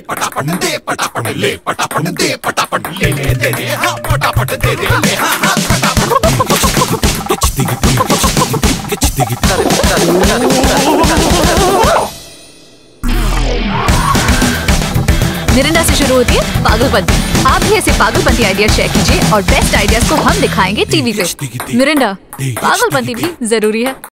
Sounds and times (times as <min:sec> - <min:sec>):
Music: 0:00.0 - 0:24.1
Speech: 0:15.5 - 0:24.1.